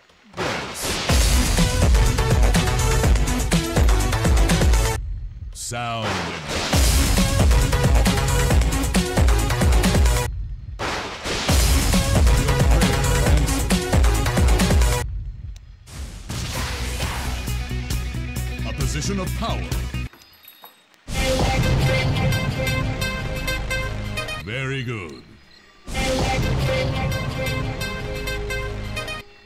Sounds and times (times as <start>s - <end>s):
Music: 1.1s - 5.1s, 6.3s - 10.3s, 11.4s - 15.1s, 16.5s - 20.2s, 20.9s - 24.5s, 25.8s - 29.4s
Speech: 5.6s - 6.5s, 18.6s - 19.8s, 24.4s - 25.4s.